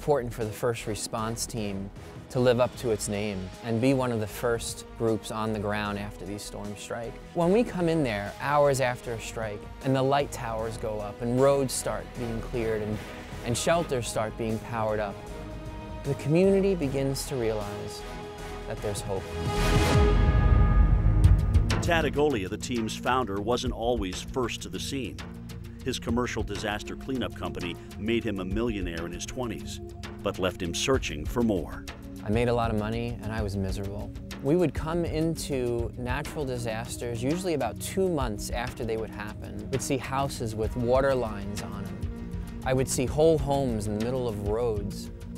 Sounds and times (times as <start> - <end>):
Speech: 0.0 - 15.2, 16.0 - 18.0, 18.7 - 19.3, 21.8 - 25.2, 25.8 - 42.0, 42.6 - 45.1
Music: 0.0 - 45.3.